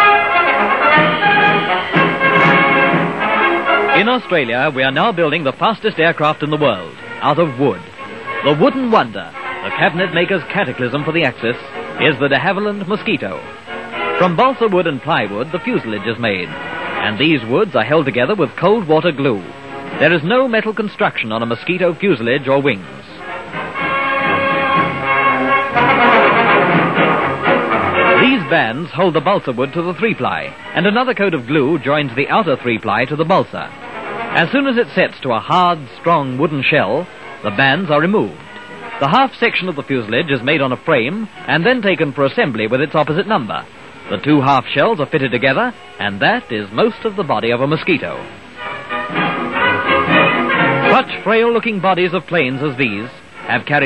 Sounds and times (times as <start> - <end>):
Music: 0.0 - 53.8
Speech: 4.0 - 7.8, 8.4 - 13.5, 14.2 - 23.2, 28.2 - 33.7, 34.4 - 38.4, 39.0 - 48.3, 50.9 - 53.8.